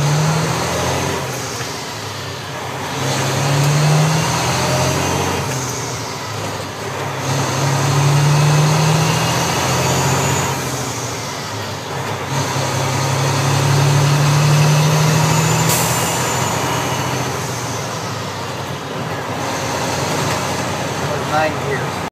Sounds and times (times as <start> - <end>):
Truck: 0.0 - 22.1
Speech: 21.1 - 22.1.